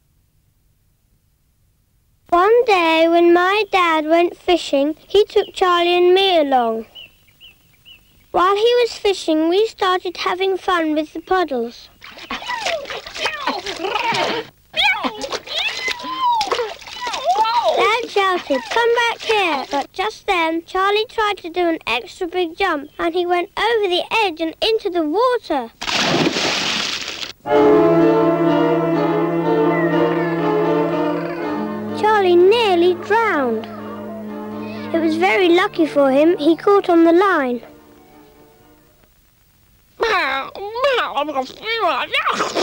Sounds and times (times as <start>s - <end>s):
Speech: 2.3s - 6.9s, 8.4s - 25.8s, 32.0s - 33.9s, 34.6s - 37.7s, 40.0s - 42.6s
Music: 27.4s - 39.1s.